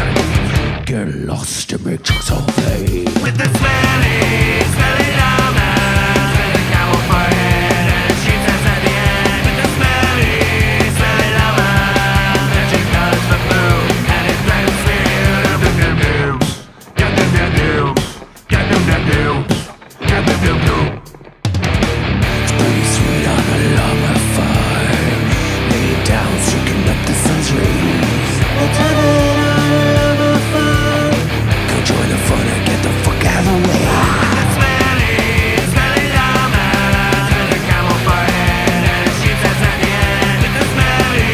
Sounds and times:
Music: 0:00.0 - 0:01.0, 0:02.0 - 0:41.3.

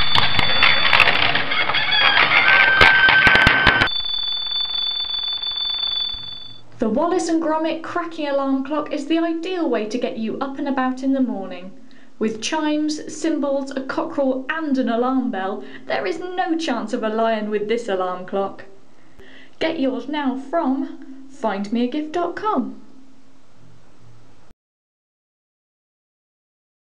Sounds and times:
Speech: 0:06.8 - 0:18.8, 0:19.6 - 0:22.9.

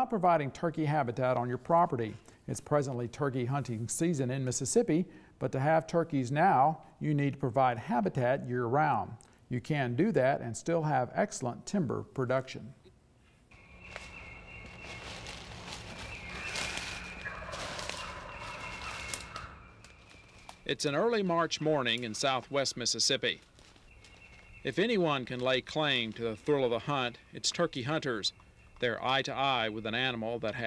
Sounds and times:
Speech: 0:00.0 - 0:12.8, 0:20.7 - 0:23.4, 0:24.7 - 0:30.6.

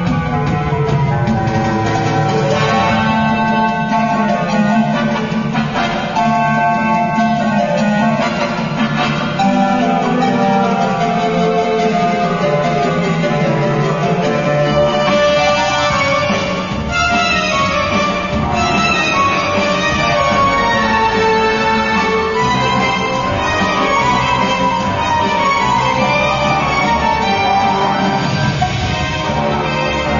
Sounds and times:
Background music: 0:00.0 - 0:30.1.

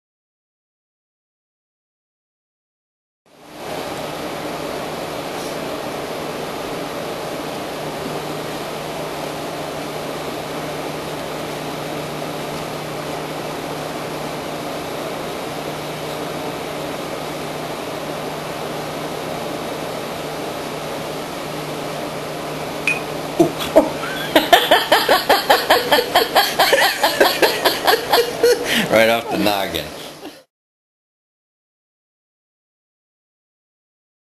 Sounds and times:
Speech: 0:28.9 - 0:30.0.

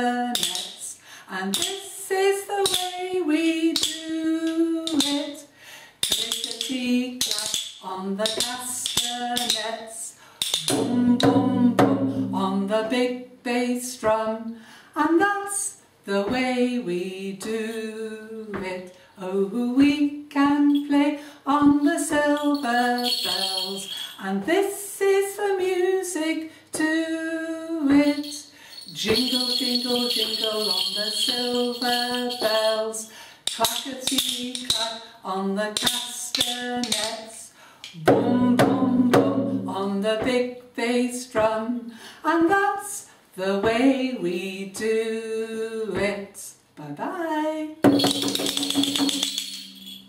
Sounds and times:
Bass drum: 0:10.7 - 0:12.6, 0:38.0 - 0:40.4.

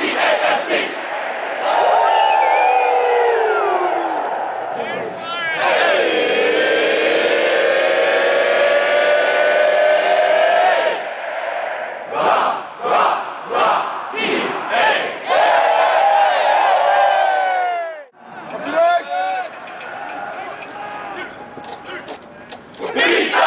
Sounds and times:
Crowd: 0:00.0 - 0:23.4.

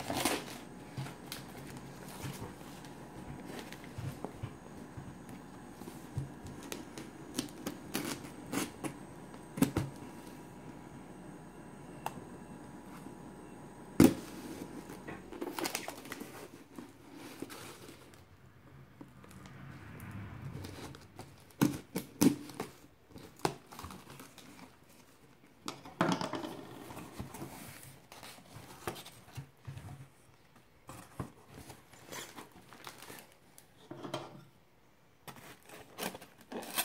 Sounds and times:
Inside, small room: 0:00.0 - 0:36.8.

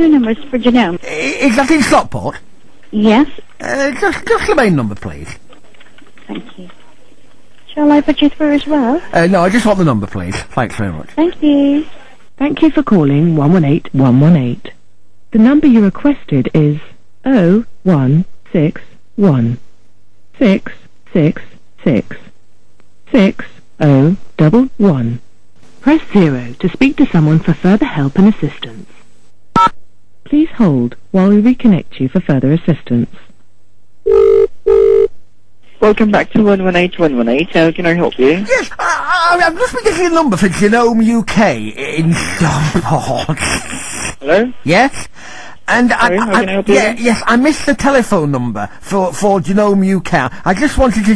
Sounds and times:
Female speech, woman speaking: 0:00.0 - 0:01.6, 0:02.9 - 0:03.4, 0:06.2 - 0:06.8, 0:07.7 - 0:09.1, 0:11.2 - 0:19.6, 0:20.4 - 0:22.3, 0:23.1 - 0:25.2, 0:25.8 - 0:28.8, 0:30.3 - 0:33.2, 0:35.8 - 0:38.5, 0:45.7 - 0:48.0
Conversation: 0:00.0 - 0:51.1
Male speech, man speaking: 0:01.0 - 0:02.4, 0:03.6 - 0:05.4, 0:09.1 - 0:11.2, 0:37.9 - 0:43.4, 0:44.2 - 0:45.0, 0:45.7 - 0:51.1.

